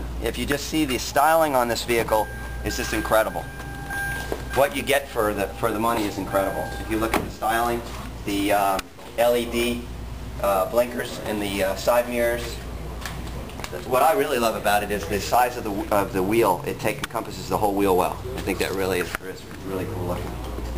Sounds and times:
Speech: 0.2 - 3.5, 4.6 - 12.7, 13.6 - 20.6.

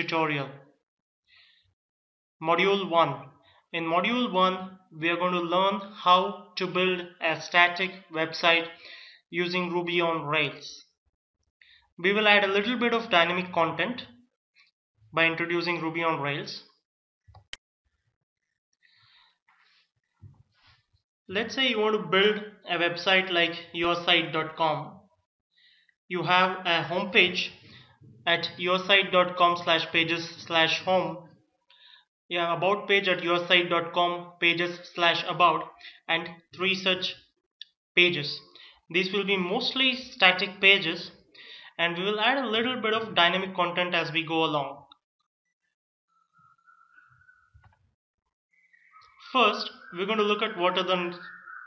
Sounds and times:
Speech: 0.0 - 0.7, 2.4 - 10.9, 12.0 - 14.2, 15.2 - 16.7, 21.3 - 25.0, 26.1 - 27.6, 28.3 - 31.3, 32.3 - 37.3, 38.0 - 44.9, 49.3 - 51.3.

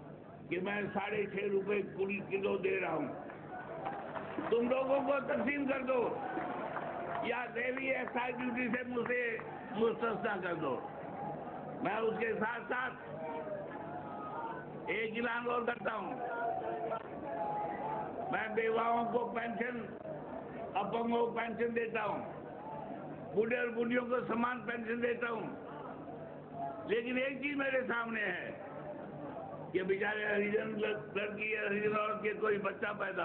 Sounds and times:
Speech: 0.5 - 3.2, 4.5 - 6.2, 7.2 - 10.8, 11.8 - 13.6, 14.9 - 17.0, 18.3 - 20.0, 20.8 - 22.3, 23.4 - 25.6, 26.9 - 28.6, 29.8 - 33.2.

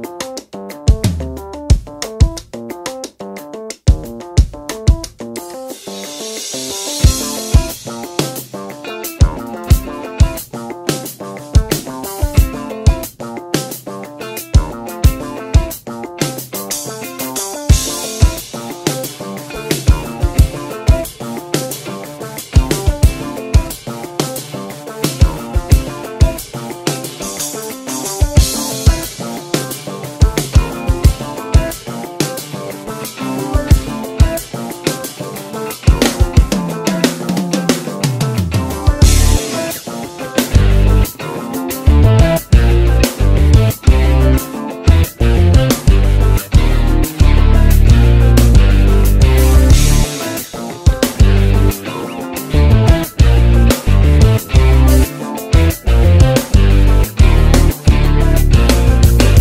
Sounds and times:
Music: 0.0 - 59.4.

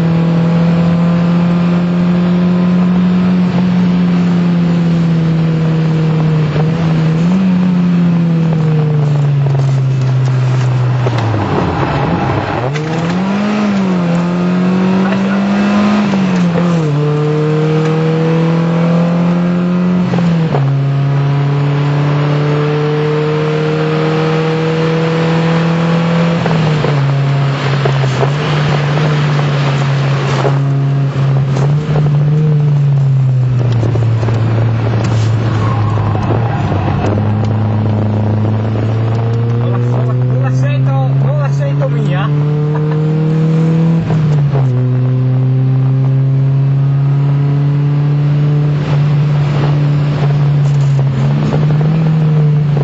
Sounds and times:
Car: 0.0 - 52.8.

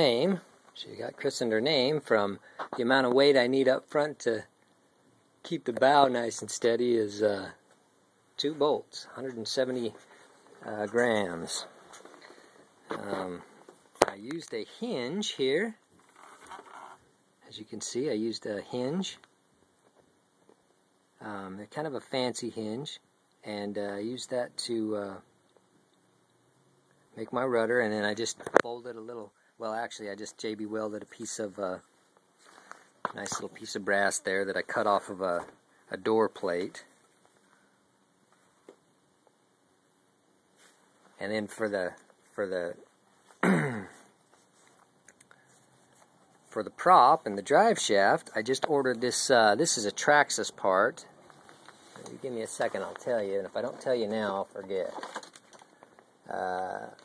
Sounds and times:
Speech: 0.0 - 4.5, 5.4 - 7.6, 8.4 - 11.8, 12.9 - 15.9, 17.4 - 19.3, 21.2 - 25.3, 27.2 - 31.9, 33.1 - 37.0, 41.2 - 42.9, 46.5 - 51.2, 52.0 - 55.1, 56.2 - 57.0.

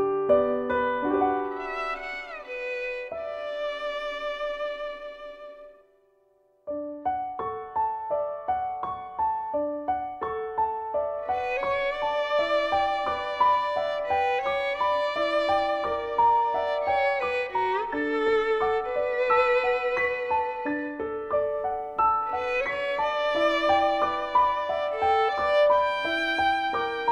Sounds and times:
Violin, fiddle: 1.3 - 5.8, 11.2 - 27.1.

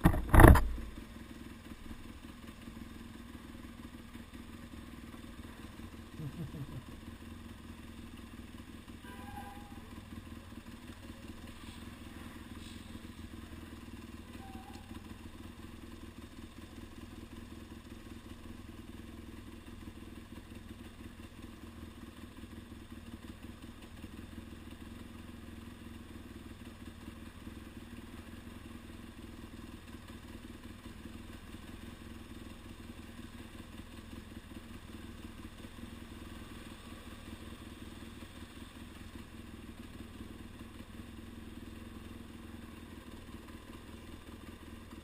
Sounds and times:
Vehicle: 0.0 - 45.0.

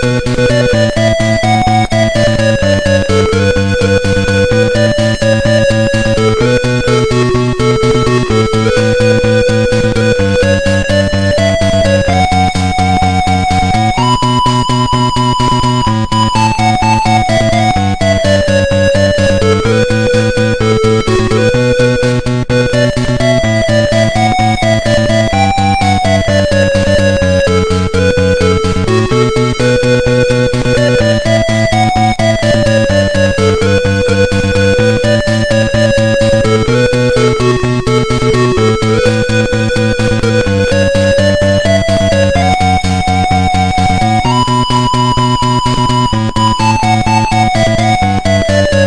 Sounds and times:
Music: 0.0 - 48.8.

